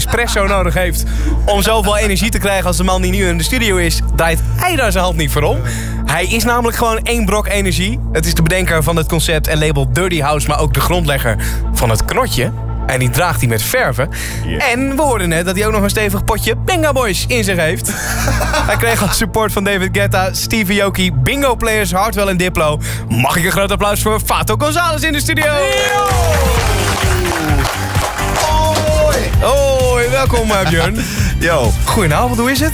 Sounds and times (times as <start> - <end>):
Electronic music: 0.0 - 6.6, 25.4 - 32.7
Speech: 0.0 - 17.9, 18.7 - 26.0, 28.4 - 32.7.